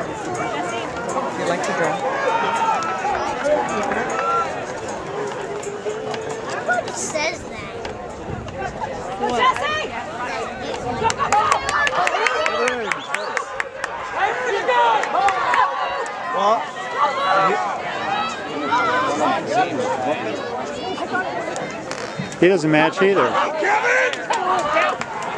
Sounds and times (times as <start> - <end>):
Outside, urban or manmade: 0.0 - 25.3
Run: 0.0 - 25.3.